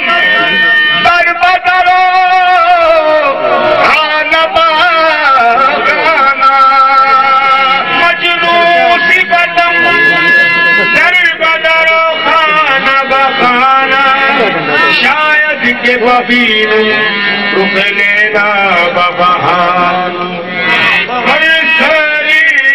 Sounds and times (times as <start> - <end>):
Speech: 0.0 - 2.0, 3.8 - 16.2
Traditional music: 0.0 - 22.7.